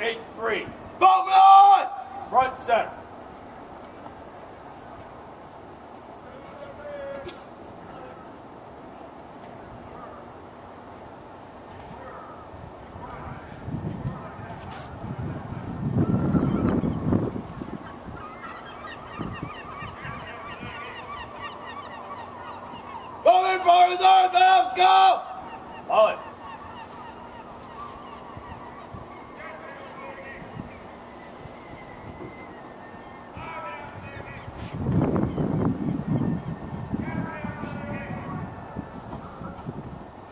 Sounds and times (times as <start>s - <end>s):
Goose: 16.0s - 23.3s, 25.3s - 30.9s.